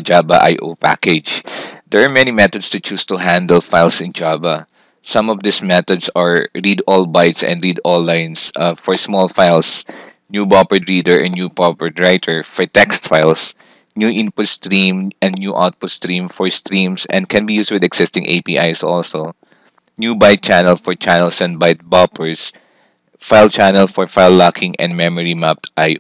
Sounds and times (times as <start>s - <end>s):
Speech: 0.0s - 19.4s, 20.0s - 22.6s, 23.2s - 26.0s.